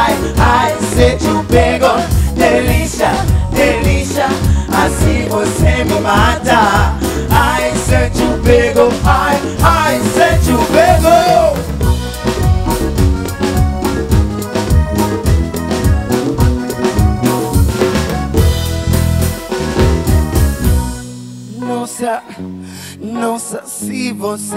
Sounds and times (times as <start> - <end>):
Singing: 0.0 - 11.6
Music: 0.0 - 24.5.